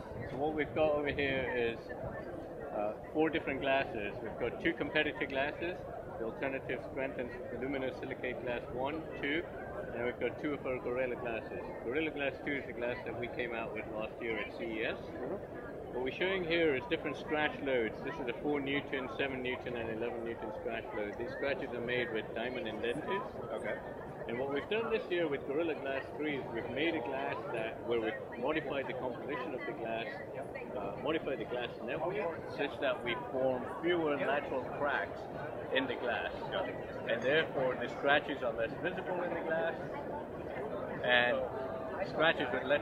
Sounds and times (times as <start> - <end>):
Speech: 0.0 - 42.8.